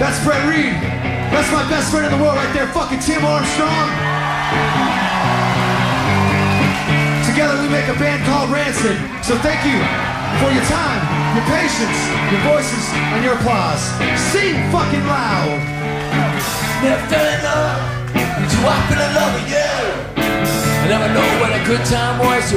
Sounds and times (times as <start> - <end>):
Speech: 0.0 - 4.0, 7.2 - 15.6, 20.8 - 22.5
Music: 0.0 - 22.5.